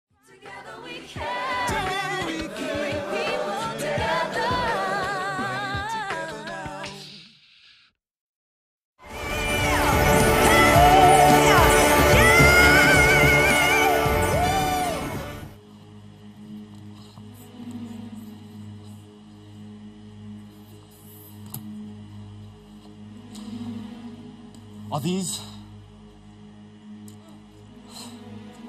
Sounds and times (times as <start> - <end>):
Singing: 0.1 - 7.2, 9.0 - 15.4.